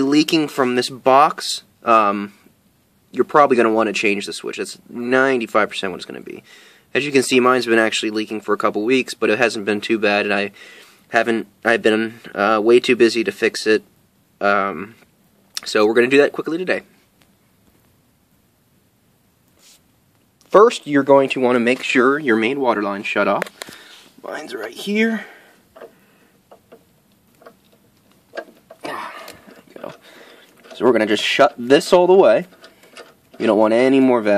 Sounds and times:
Speech: 0.0s - 2.3s, 3.1s - 6.4s, 7.0s - 15.0s, 15.6s - 16.9s, 20.5s - 23.5s, 24.2s - 25.4s, 30.8s - 32.5s, 33.4s - 34.3s.

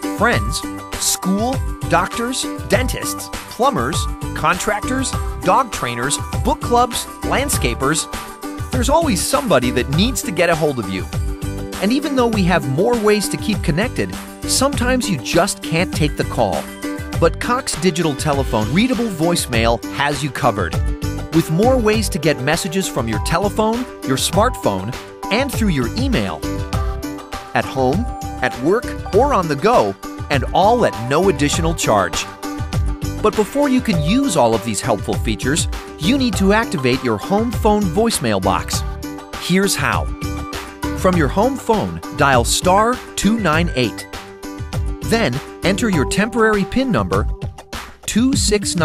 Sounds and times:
Music: 0.0s - 48.8s
Speech: 0.2s - 8.1s, 8.8s - 11.1s, 11.8s - 20.8s, 21.4s - 26.5s, 27.6s - 32.3s, 33.2s - 38.8s, 39.4s - 40.1s, 41.0s - 44.1s, 45.0s - 47.3s, 48.1s - 48.8s.

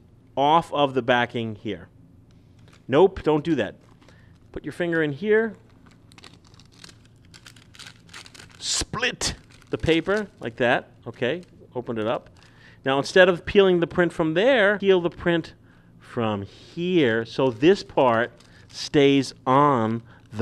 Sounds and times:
Speech: 0.4s - 1.9s, 2.9s - 3.8s, 4.6s - 5.6s, 8.6s - 12.3s, 12.9s - 20.4s.

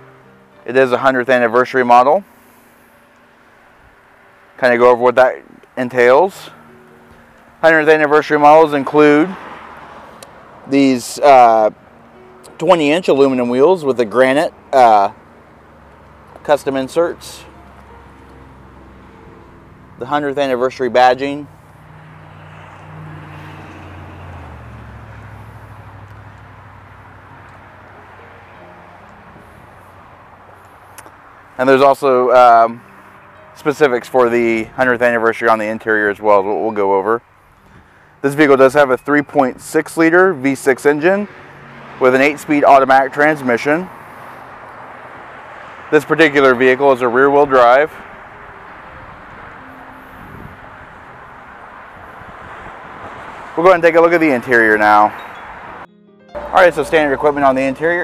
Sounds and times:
Music: 0.0s - 3.6s, 5.8s - 8.8s, 11.1s - 22.4s, 27.7s - 30.0s, 32.0s - 42.9s, 48.1s - 50.8s, 55.2s - 58.0s
Car: 0.0s - 58.0s
Speech: 0.7s - 2.2s, 4.6s - 6.6s, 7.6s - 9.4s, 10.7s - 11.8s, 12.6s - 15.2s, 16.4s - 17.5s, 20.0s - 21.5s, 31.6s - 32.8s, 33.6s - 37.2s, 38.2s - 41.3s, 42.0s - 43.9s, 45.9s - 48.0s, 53.6s - 55.1s, 56.5s - 58.0s.

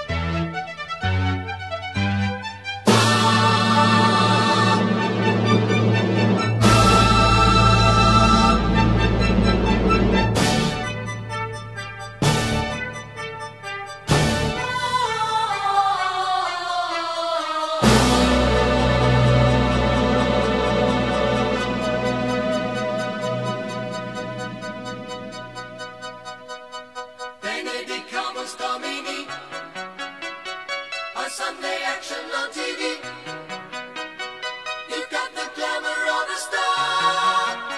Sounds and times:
Electronica: 0.0s - 30.1s
Opera: 2.8s - 13.2s, 14.1s - 29.8s, 31.0s - 33.8s, 34.7s - 37.7s.

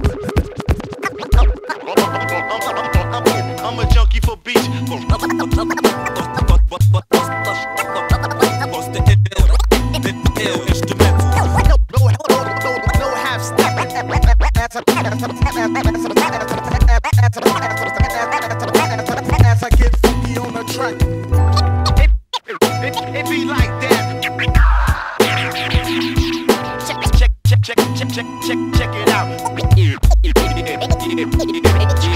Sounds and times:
Music: 0.0s - 32.1s.

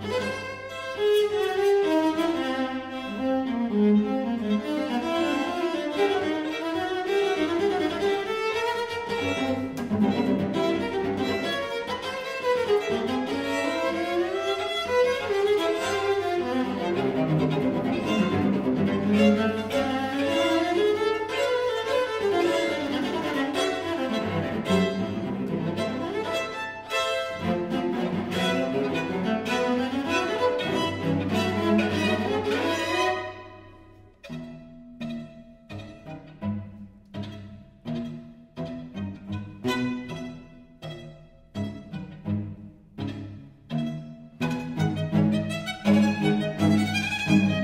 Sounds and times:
Cello: 0.0s - 47.6s
Classical music: 0.0s - 47.6s
Orchestra: 0.0s - 47.6s
String section: 0.0s - 47.6s
Violin, fiddle: 0.0s - 47.6s.

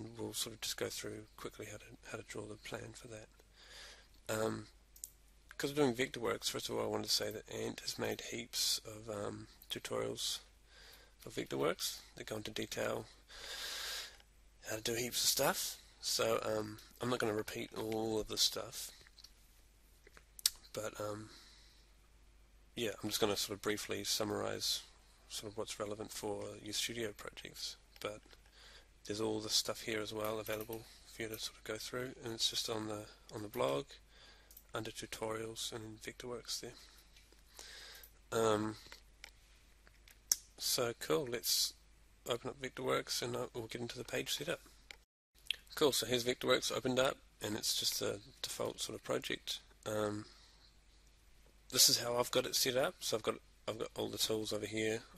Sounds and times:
Speech: 0.0s - 3.3s, 4.3s - 4.7s, 5.6s - 10.5s, 11.2s - 13.2s, 14.6s - 19.0s, 20.5s - 21.4s, 22.8s - 28.2s, 29.0s - 34.0s, 34.7s - 36.9s, 38.3s - 38.9s, 40.6s - 44.7s, 45.5s - 50.3s, 51.7s - 55.1s
Inside, small room: 0.0s - 55.1s.

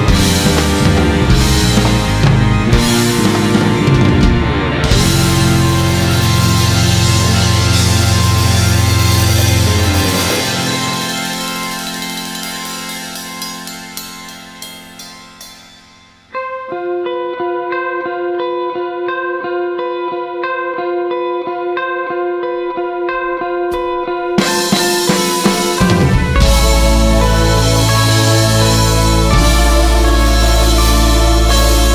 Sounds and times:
Drum kit: 0.0s - 16.3s, 23.7s - 31.9s
Effects unit: 0.0s - 31.9s.

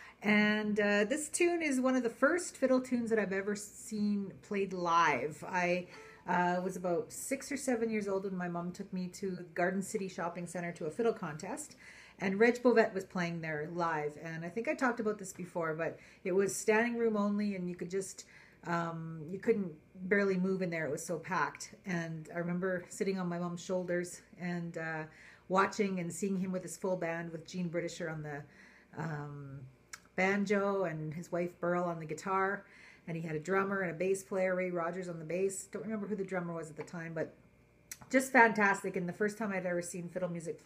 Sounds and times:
Speech: 0.2s - 37.4s, 38.0s - 40.6s.

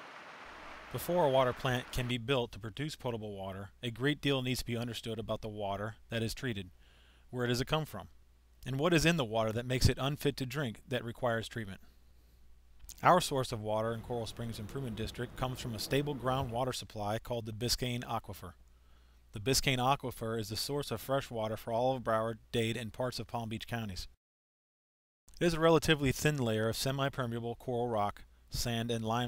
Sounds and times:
Speech: 1.0s - 6.7s, 7.3s - 11.8s, 12.9s - 18.6s, 19.3s - 24.2s, 25.4s - 29.2s.

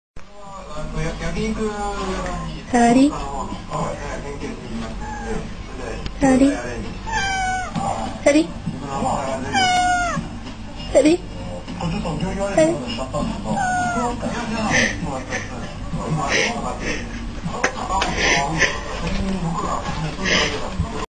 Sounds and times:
Meow: 5.0s - 5.4s, 7.1s - 7.8s, 9.4s - 10.3s, 13.6s - 14.2s
Caterwaul: 7.1s - 7.8s, 9.4s - 10.3s, 13.6s - 14.2s
Speech: 11.8s - 21.0s.

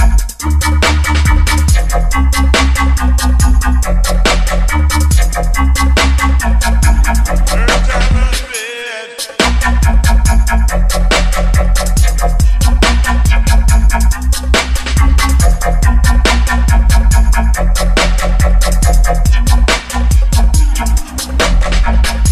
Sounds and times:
Hip hop music: 0.0s - 22.3s.

